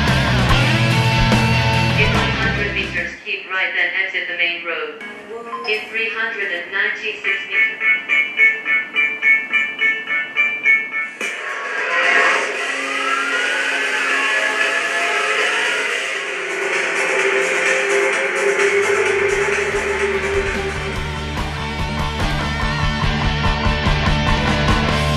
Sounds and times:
Music: 0.0 - 3.2, 5.0 - 6.4, 7.3 - 25.1
Speech: 2.0 - 7.7.

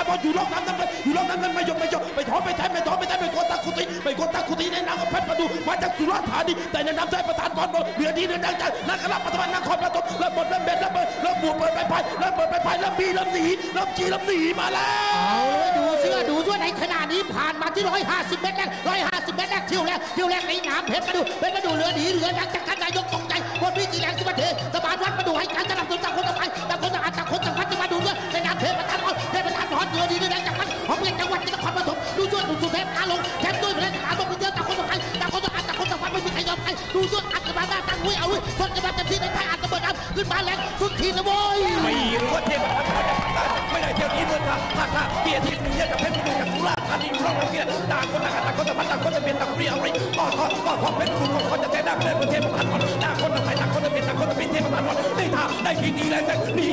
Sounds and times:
Speech: 0.0 - 42.8
Music: 0.0 - 56.7.

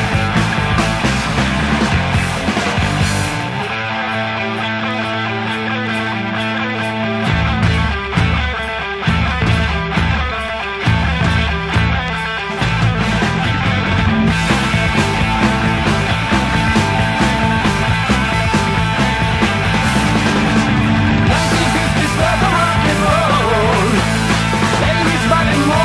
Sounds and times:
Rock and roll: 0.0 - 25.8.

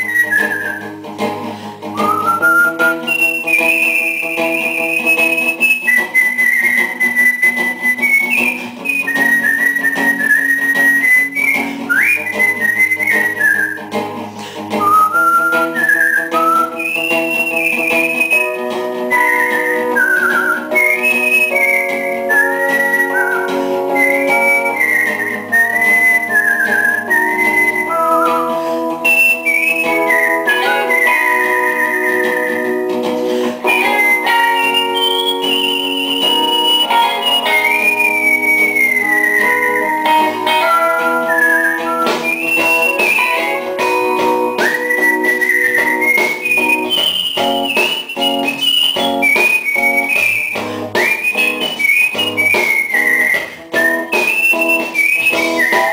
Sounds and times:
Whistling: 0.0 - 1.2, 1.8 - 55.9
Electronic organ: 0.0 - 55.9.

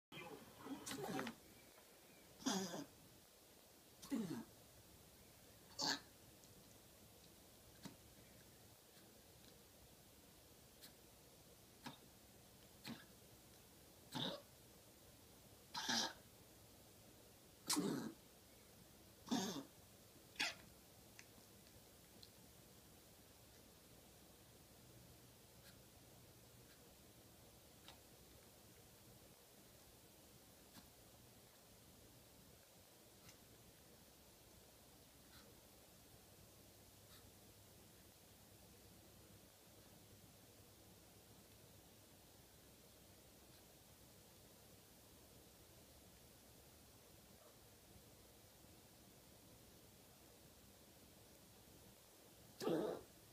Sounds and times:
Sneeze: 0.7 - 1.2, 17.7 - 18.1.

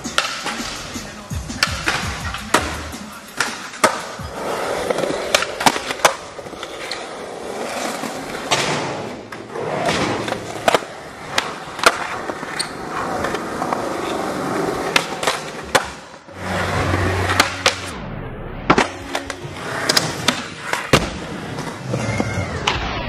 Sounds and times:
Skateboard: 0.0 - 17.9, 18.7 - 23.0.

